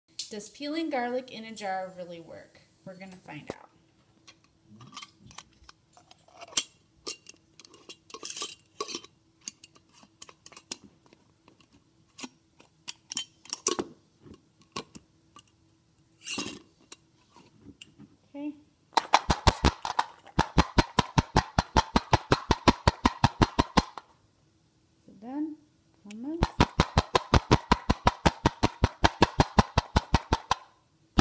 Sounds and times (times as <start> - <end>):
Inside, small room: 0.1 - 31.2
Speech: 0.3 - 3.7, 25.0 - 26.5.